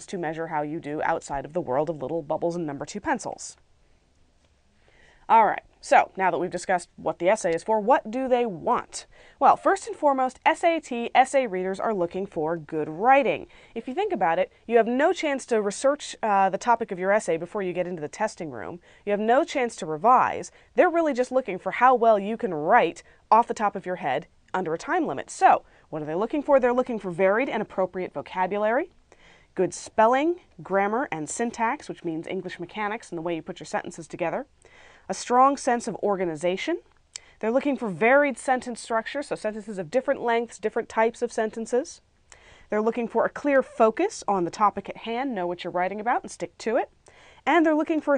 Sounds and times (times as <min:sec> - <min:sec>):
Speech: 0:00.0 - 0:03.6, 0:05.3 - 0:29.0, 0:29.6 - 0:34.5, 0:35.1 - 0:42.0, 0:42.7 - 0:48.1.